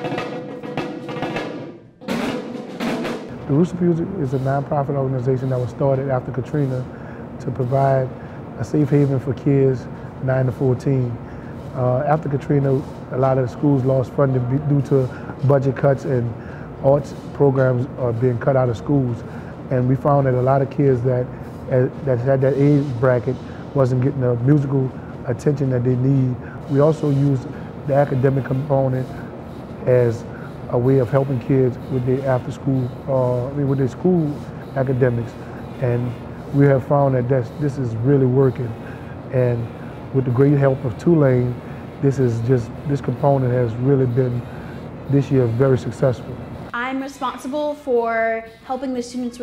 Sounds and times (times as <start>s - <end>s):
Speech: 3.5s - 11.2s, 11.8s - 29.2s, 29.8s - 44.5s, 45.1s - 49.4s.